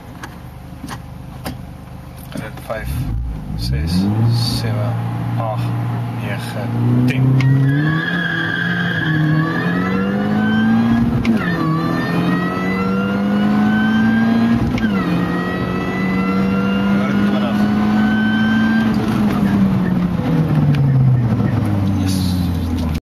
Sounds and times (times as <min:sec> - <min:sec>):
Car: 0:00.0 - 0:23.0
Speech: 0:02.3 - 0:07.4, 0:17.0 - 0:17.7, 0:22.0 - 0:22.7
Accelerating, revving, vroom: 0:03.0 - 0:04.7, 0:06.7 - 0:19.7.